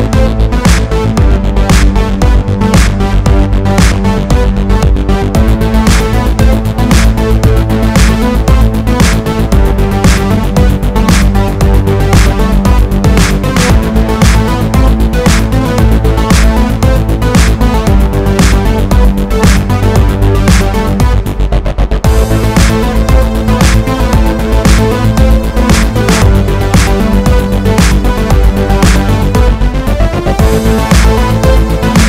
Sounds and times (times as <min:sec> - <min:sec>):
Music: 0:00.0 - 0:32.0.